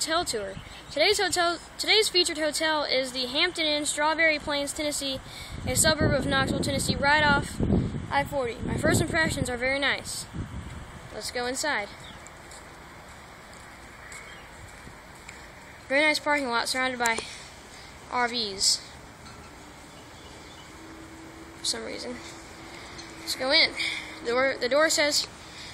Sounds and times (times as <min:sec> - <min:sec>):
Speech: 0:00.0 - 0:10.3, 0:11.1 - 0:12.0, 0:15.9 - 0:17.3, 0:18.1 - 0:18.9, 0:21.6 - 0:22.3, 0:23.3 - 0:25.3.